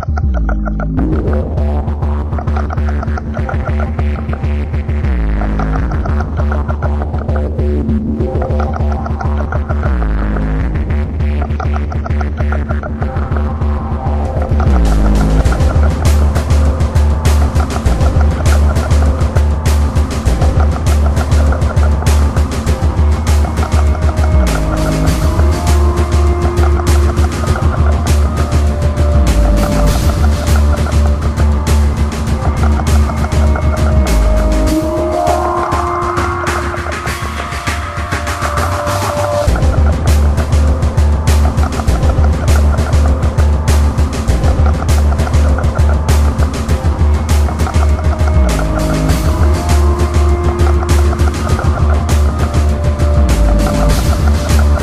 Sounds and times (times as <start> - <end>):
Music: 0.0 - 54.8.